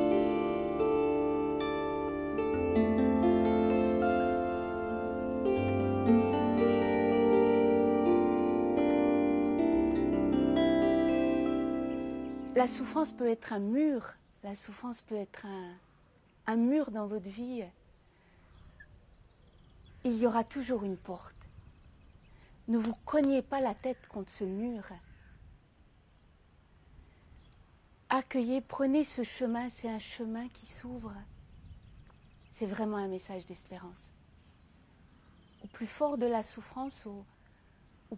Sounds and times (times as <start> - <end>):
Speech: 12.6 - 15.8, 16.5 - 17.8, 20.0 - 21.4, 22.7 - 25.1, 28.1 - 31.3, 32.6 - 34.1, 35.6 - 37.3.